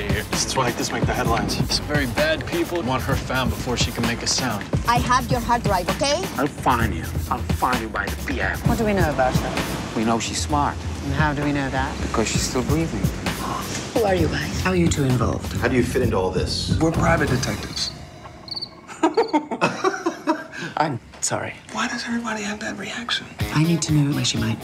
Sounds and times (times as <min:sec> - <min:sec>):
Music: 0:00.0 - 0:18.2, 0:23.3 - 0:24.6.